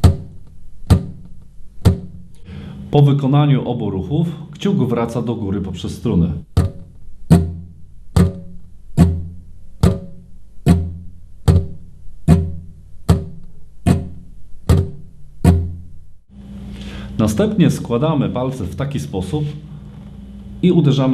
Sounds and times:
Speech: 0:02.9 - 0:06.5, 0:17.2 - 0:19.6, 0:20.6 - 0:21.1.

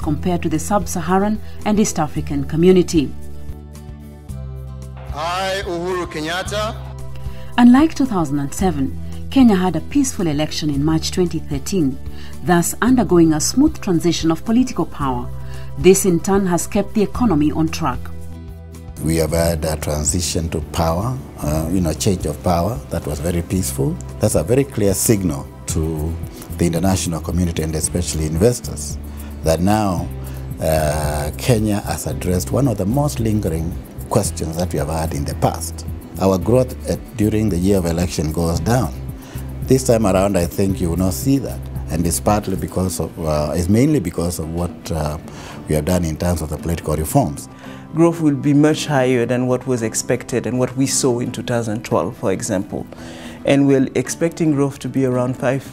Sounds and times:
Speech: 0:00.0 - 0:03.2, 0:05.1 - 0:06.8, 0:07.6 - 0:18.1, 0:19.0 - 0:39.0, 0:39.7 - 0:55.7
Music: 0:00.0 - 0:55.7.

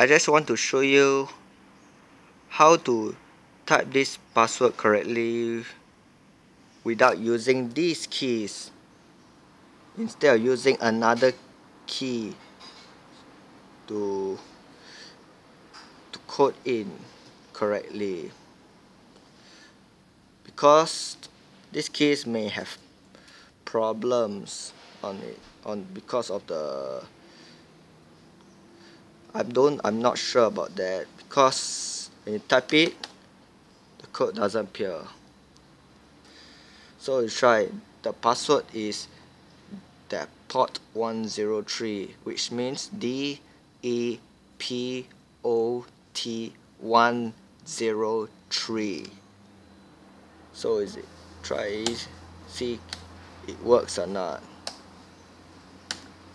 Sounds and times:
Speech: 0:00.0 - 0:01.4, 0:02.5 - 0:05.8, 0:06.8 - 0:08.8, 0:10.0 - 0:12.4, 0:13.9 - 0:14.5, 0:16.1 - 0:18.4, 0:20.5 - 0:22.8, 0:23.6 - 0:27.1, 0:29.3 - 0:33.0, 0:34.0 - 0:35.2, 0:37.0 - 0:39.1, 0:39.7 - 0:49.2, 0:50.6 - 0:54.5.

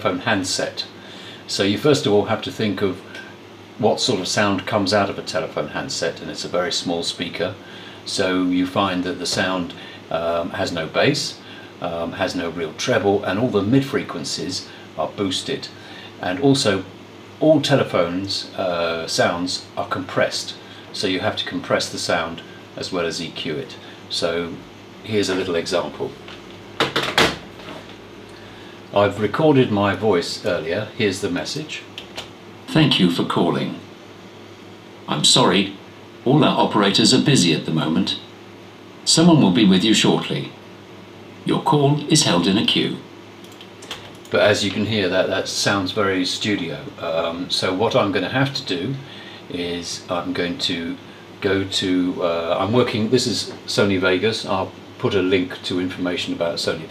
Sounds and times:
Speech: 0:00.0 - 0:26.3, 0:28.9 - 0:33.9, 0:35.1 - 0:38.4, 0:39.0 - 0:40.6, 0:41.4 - 0:43.2, 0:43.8 - 0:56.9.

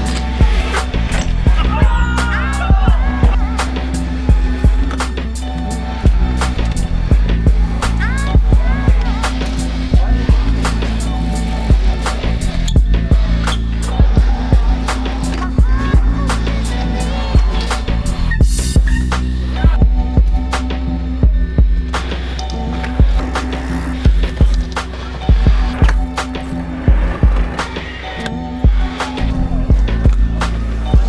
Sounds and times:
Bicycle: 0:00.0 - 0:02.0, 0:03.0 - 0:20.5, 0:21.2 - 0:31.0
Music: 0:00.0 - 0:31.0.

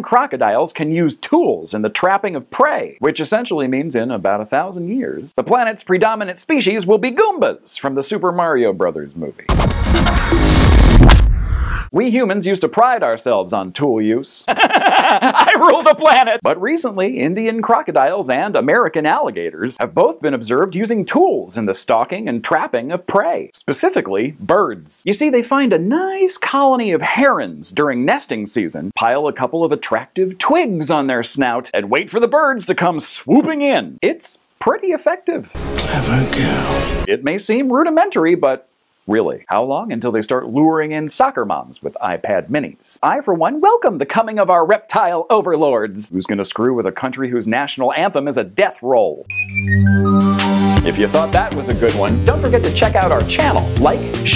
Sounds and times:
Speech: 0:00.0 - 0:09.5, 0:11.9 - 0:14.5, 0:15.2 - 0:49.3, 0:50.8 - 0:54.3
Music: 0:09.5 - 0:11.3, 0:35.5 - 0:37.1, 0:49.3 - 0:54.3.

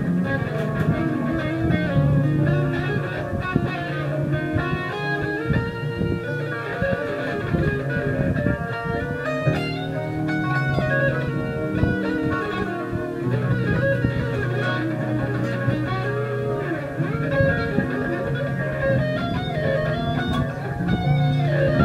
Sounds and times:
Music: 0:00.0 - 0:21.8.

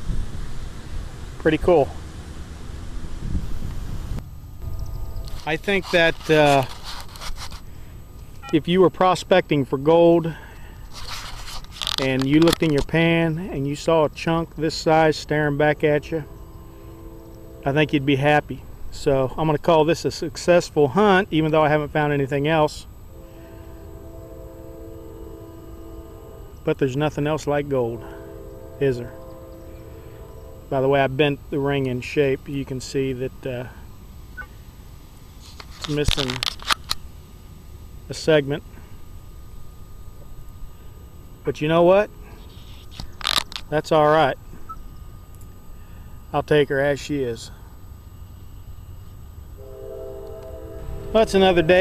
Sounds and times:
Speech: 0:01.4 - 0:02.0, 0:05.5 - 0:06.7, 0:08.5 - 0:10.4, 0:12.0 - 0:16.3, 0:17.7 - 0:22.9, 0:26.7 - 0:28.0, 0:28.8 - 0:29.1, 0:30.7 - 0:33.8, 0:35.9 - 0:36.4, 0:38.1 - 0:38.7, 0:41.5 - 0:42.1, 0:43.7 - 0:44.4, 0:46.3 - 0:47.6, 0:51.1 - 0:51.8.

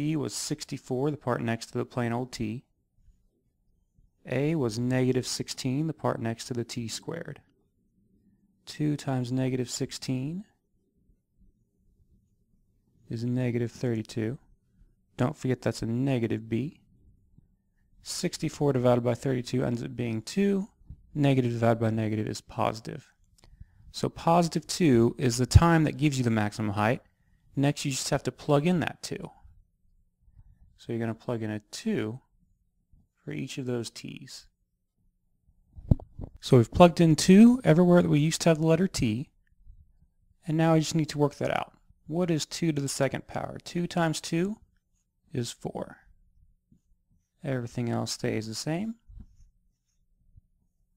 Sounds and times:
Speech: 0:00.0 - 0:02.7, 0:04.2 - 0:07.5, 0:08.6 - 0:10.6, 0:13.1 - 0:14.5, 0:15.2 - 0:16.8, 0:18.0 - 0:23.2, 0:23.9 - 0:29.4, 0:30.8 - 0:32.3, 0:33.2 - 0:34.6, 0:36.4 - 0:39.4, 0:40.4 - 0:44.7, 0:45.3 - 0:46.1, 0:47.4 - 0:49.1
Inside, small room: 0:00.0 - 0:50.9.

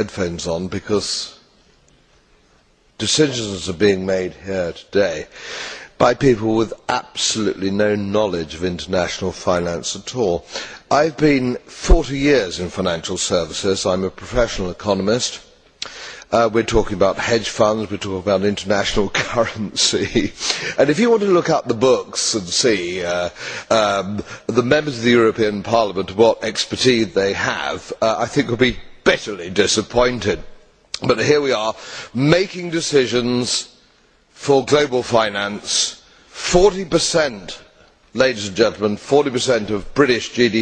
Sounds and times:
Speech: 0:00.0 - 0:01.4, 0:03.0 - 0:05.3, 0:06.0 - 0:15.5, 0:16.3 - 0:33.7, 0:34.4 - 0:40.6.

